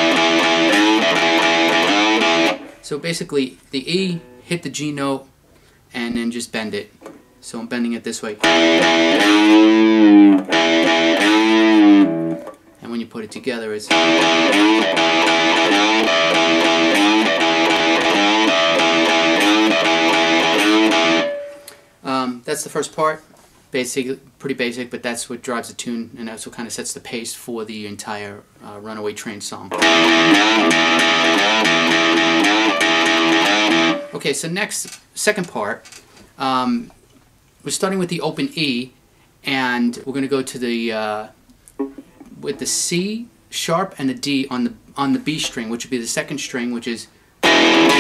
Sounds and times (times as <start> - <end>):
Guitar: 0.0 - 2.9, 8.3 - 22.0, 29.7 - 34.2, 41.6 - 42.7, 47.4 - 48.0.